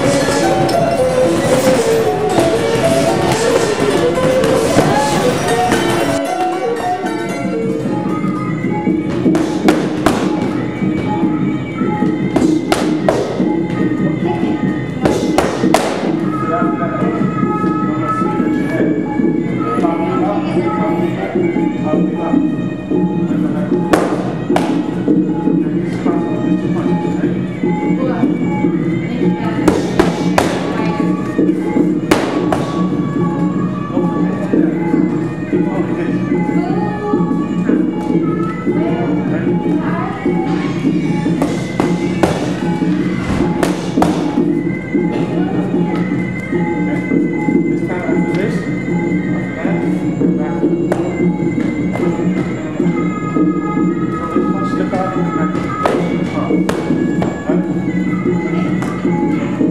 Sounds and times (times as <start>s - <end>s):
Music: 0.0s - 59.7s.